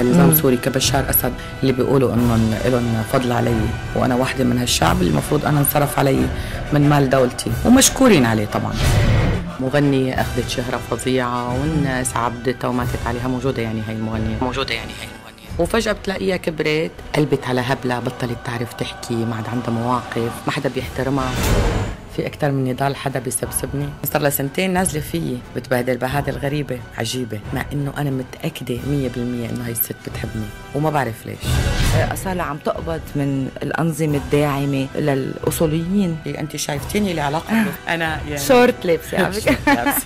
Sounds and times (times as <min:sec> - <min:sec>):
Music: 0:00.0 - 0:40.0.